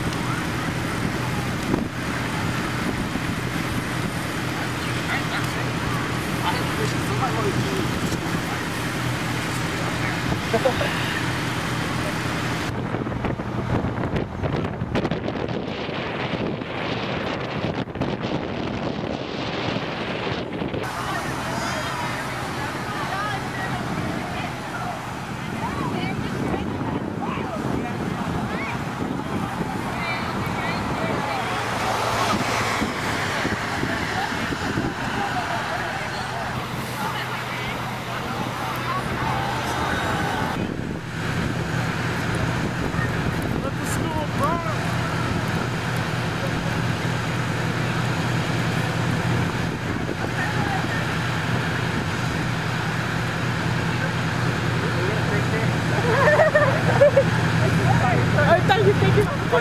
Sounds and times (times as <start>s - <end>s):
Outside, urban or manmade: 0.0s - 59.6s
Vehicle: 0.0s - 59.6s.